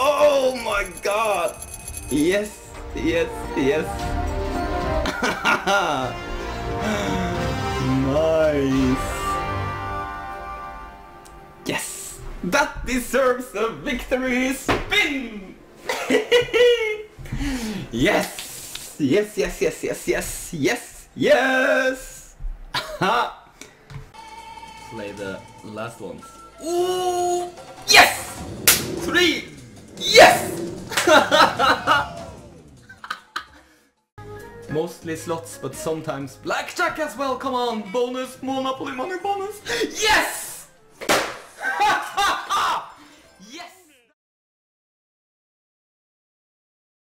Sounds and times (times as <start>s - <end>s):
Speech: 0.0s - 4.0s, 6.9s - 9.4s, 11.7s - 15.6s, 17.9s - 18.4s, 19.0s - 22.3s, 29.0s - 30.6s, 34.7s - 40.7s, 43.4s - 44.2s
Music: 0.0s - 18.4s, 23.6s - 44.2s.